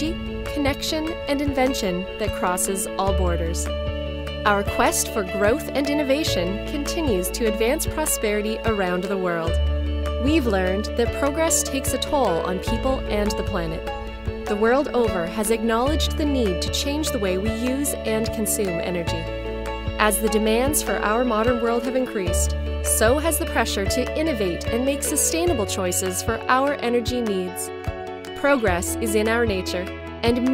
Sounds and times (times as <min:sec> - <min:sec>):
Speech: 0:00.0 - 0:03.7, 0:04.5 - 0:09.6, 0:10.2 - 0:13.9, 0:14.5 - 0:19.3, 0:20.0 - 0:27.7, 0:28.4 - 0:30.5
Music: 0:00.0 - 0:30.5.